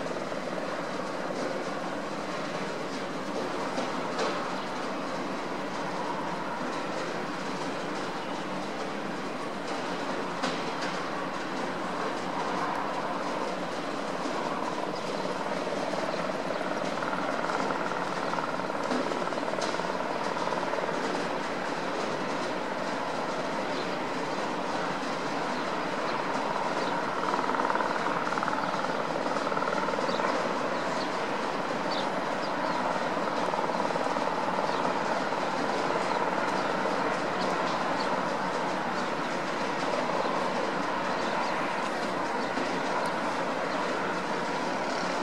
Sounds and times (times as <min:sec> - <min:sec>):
Vehicle: 0:00.0 - 0:45.2.